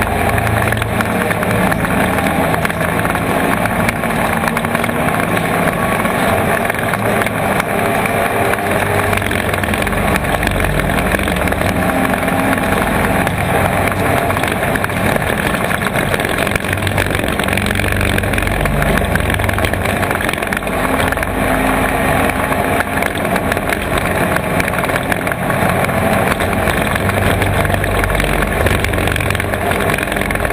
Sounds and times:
Vehicle: 0.0 - 30.5.

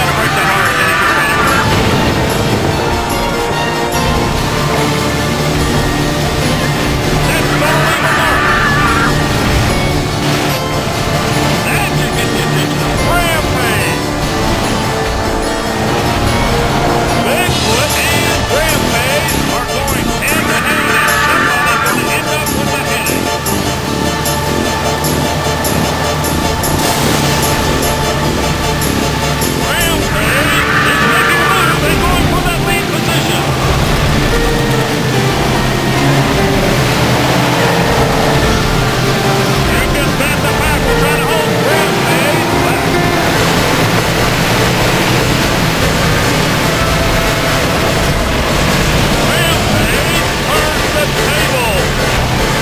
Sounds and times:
Speech: 0.0 - 1.6, 7.2 - 9.2, 11.6 - 14.0, 17.2 - 23.3, 29.6 - 33.5, 39.7 - 42.9, 49.3 - 51.9
Music: 0.0 - 52.6
Vehicle: 22.9 - 52.6.

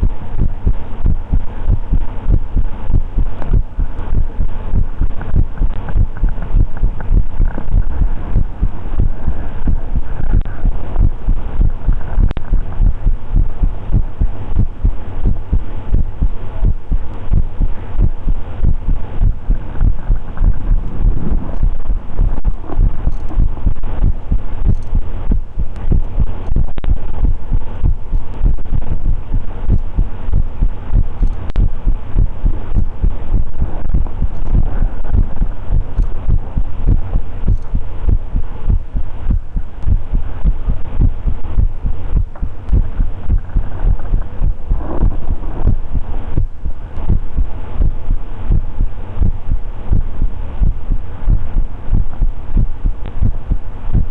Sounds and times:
Heart sounds, heartbeat: 0.0 - 54.1
Hum: 0.0 - 54.1
Throbbing: 0.0 - 54.1.

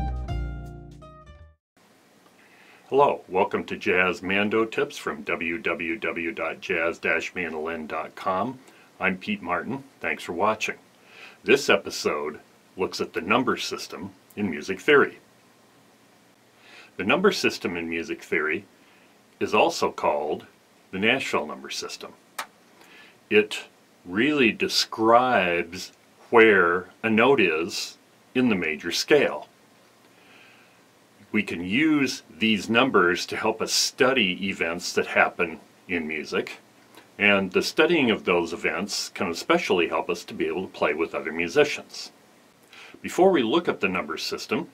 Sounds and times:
Speech: 2.9 - 10.8, 11.4 - 15.2, 17.0 - 18.7, 19.4 - 22.2, 23.3 - 29.5, 31.2 - 36.6, 37.2 - 42.2, 43.0 - 44.7.

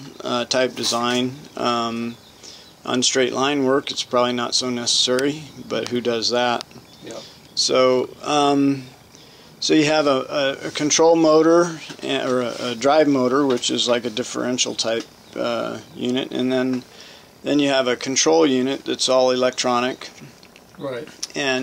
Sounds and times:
Speech: 0.0 - 2.2, 2.9 - 9.0, 9.6 - 16.9, 17.5 - 20.2, 20.8 - 21.6
Inside, small room: 0.0 - 21.6.

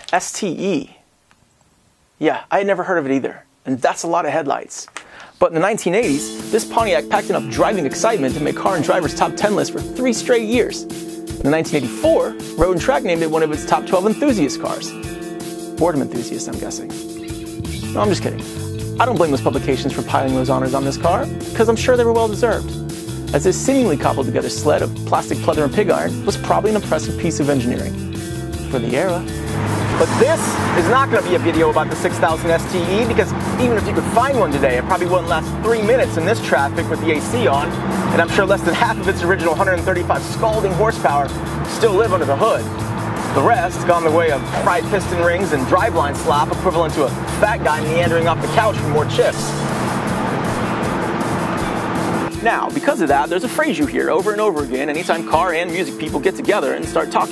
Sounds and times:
Speech: 0.0 - 1.0, 2.2 - 10.8, 11.4 - 15.0, 15.8 - 17.0, 17.9 - 18.4, 19.0 - 22.7, 23.3 - 28.0, 28.7 - 29.3, 30.0 - 42.7, 43.4 - 49.5, 52.4 - 57.3
Music: 5.8 - 57.3.

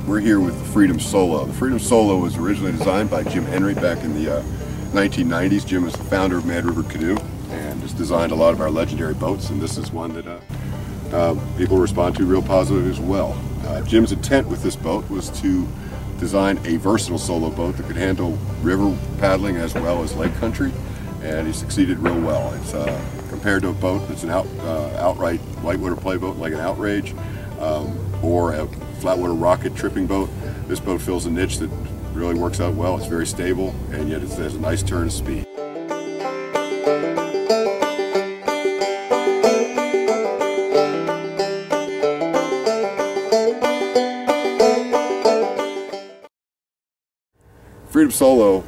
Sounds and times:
Vehicle: 0.0 - 35.5, 47.4 - 48.6
Music: 0.0 - 46.3
Speech: 0.1 - 10.5, 11.1 - 35.5, 47.9 - 48.6.

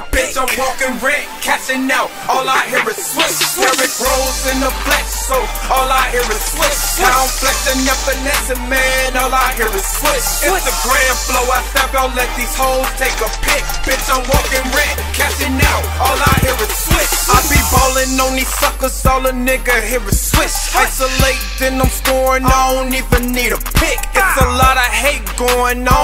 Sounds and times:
Music: 0.0 - 26.0.

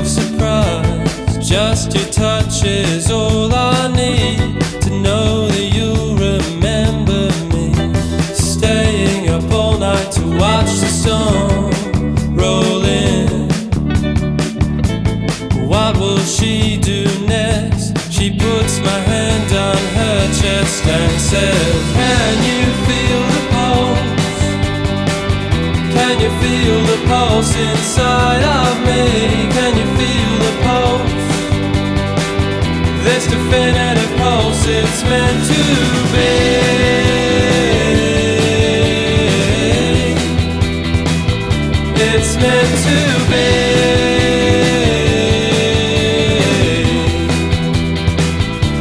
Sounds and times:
Independent music: 0.0 - 48.8.

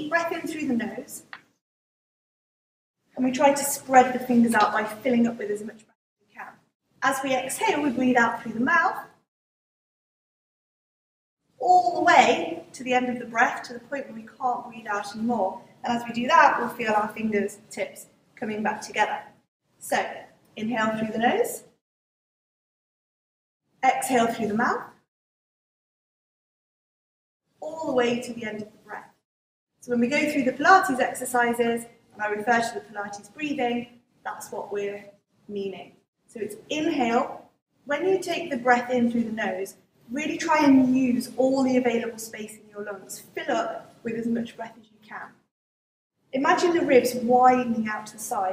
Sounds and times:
Speech: 0.0 - 1.3, 3.2 - 9.2, 11.6 - 21.7, 23.8 - 25.0, 27.6 - 29.2, 29.9 - 45.4, 46.4 - 48.5.

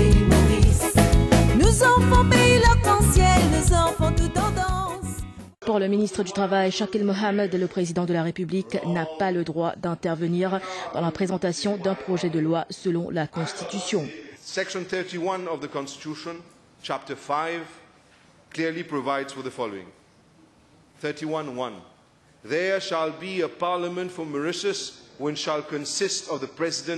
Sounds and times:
Music: 0.0 - 5.6
Narration, monologue: 5.5 - 26.9
Female speech, woman speaking: 5.6 - 14.2.

